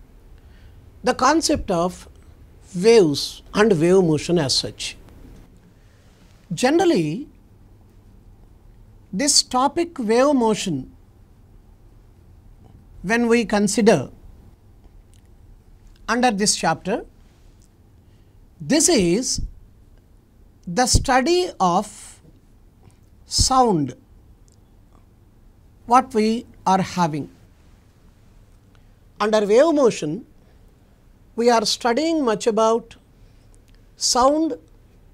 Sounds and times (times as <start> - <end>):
Speech: 1.0 - 2.1, 2.7 - 5.0, 6.5 - 7.3, 9.1 - 11.0, 13.0 - 14.2, 16.1 - 17.1, 18.6 - 19.5, 20.7 - 22.2, 23.3 - 24.0, 25.9 - 27.4, 29.2 - 30.3, 31.4 - 33.0, 34.0 - 34.7.